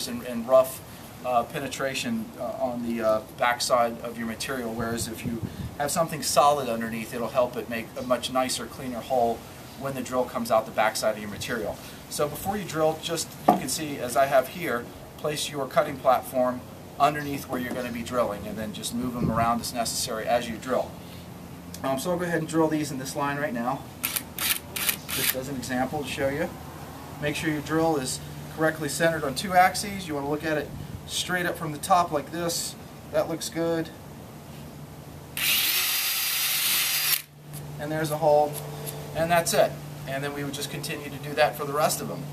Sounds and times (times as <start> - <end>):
Speech: 0.0 - 20.9, 21.8 - 23.9, 25.2 - 26.6, 27.2 - 34.0, 37.8 - 38.6, 39.2 - 42.3
Drill: 24.0 - 25.4, 35.4 - 37.3.